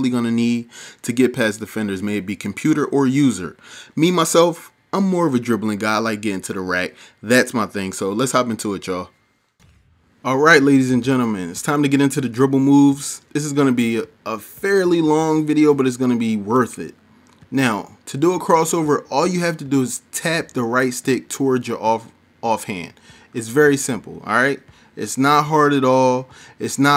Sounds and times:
Speech: 0:00.0 - 0:09.1, 0:10.2 - 0:26.9.

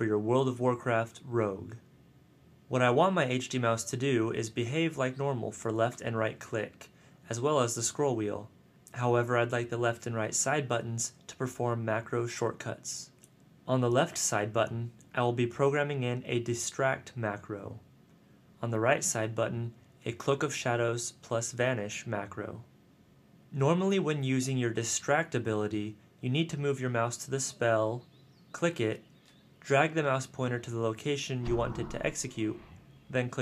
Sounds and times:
Speech: 0:00.0 - 0:01.9, 0:02.7 - 0:17.9, 0:18.6 - 0:22.7, 0:23.5 - 0:28.0, 0:28.6 - 0:29.0, 0:29.6 - 0:33.4.

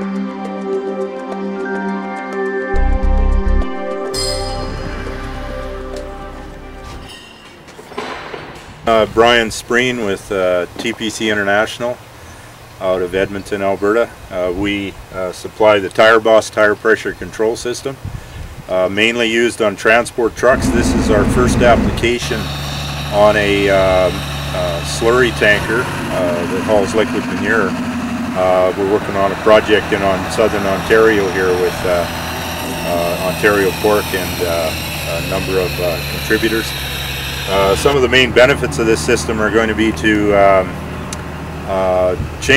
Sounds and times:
Speech: 0:08.9 - 0:12.0, 0:12.8 - 0:18.0, 0:18.7 - 0:22.5, 0:23.1 - 0:27.8, 0:28.4 - 0:32.1, 0:32.7 - 0:36.8, 0:37.5 - 0:40.8, 0:41.7 - 0:42.5.

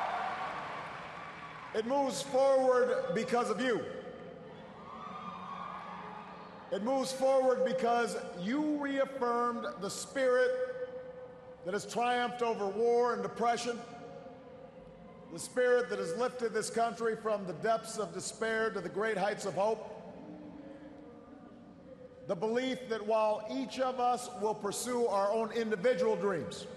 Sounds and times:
Narration, monologue: 0:01.7 - 0:04.3, 0:06.7 - 0:14.2, 0:15.3 - 0:20.4, 0:22.0 - 0:26.7
Male speech, man speaking: 0:01.8 - 0:04.1, 0:06.7 - 0:10.8, 0:11.6 - 0:14.0, 0:15.3 - 0:20.0, 0:22.3 - 0:26.7.

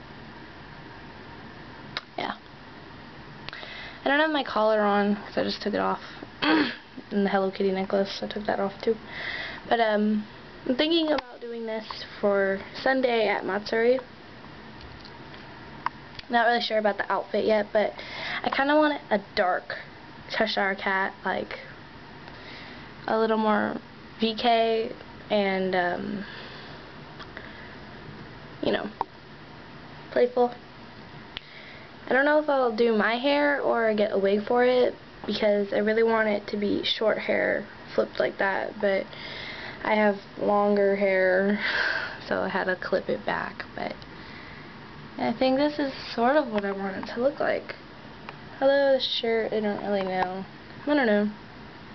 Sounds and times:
Speech: 0:02.1 - 0:02.4, 0:04.0 - 0:09.0, 0:09.7 - 0:14.1, 0:16.2 - 0:21.7, 0:23.1 - 0:26.3, 0:28.6 - 0:29.0, 0:30.1 - 0:30.6, 0:32.1 - 0:39.1, 0:39.8 - 0:41.6, 0:42.2 - 0:44.0, 0:45.2 - 0:47.8, 0:48.6 - 0:51.4.

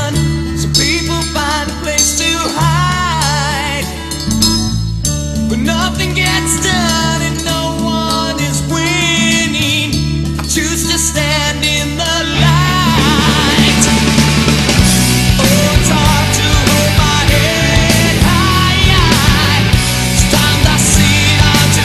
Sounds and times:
Heavy metal: 0:00.0 - 0:21.8
Inside, large room or hall: 0:00.0 - 0:21.8
Singing: 0:05.5 - 0:14.6, 0:15.4 - 0:21.8.

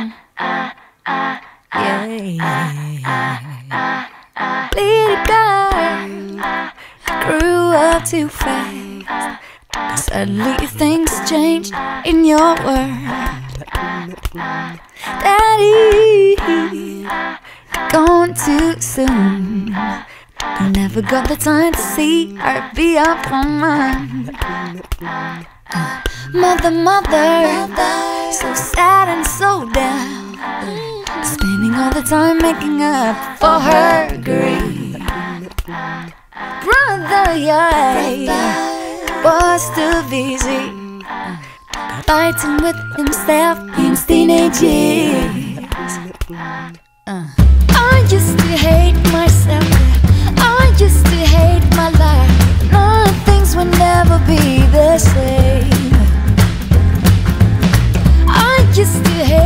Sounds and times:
Music: 0:10.0 - 0:13.9, 0:15.0 - 0:59.4.

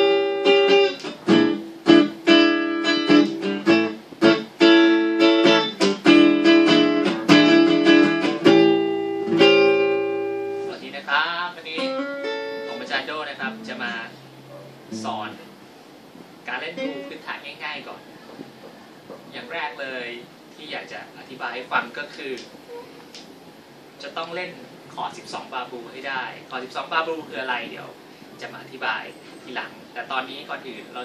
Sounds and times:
Electric guitar: 0:00.0 - 0:10.8, 0:11.8 - 0:15.4.

